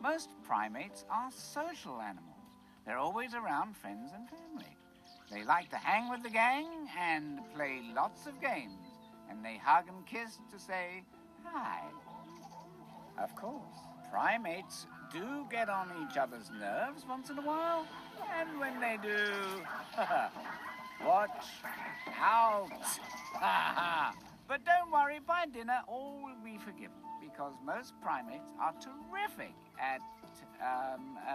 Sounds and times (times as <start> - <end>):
Speech: 0.0 - 2.3, 2.9 - 12.0, 13.2 - 19.7, 21.0 - 23.0, 24.5 - 31.3
Music: 0.0 - 31.3
Animal: 4.2 - 7.1, 11.8 - 24.5.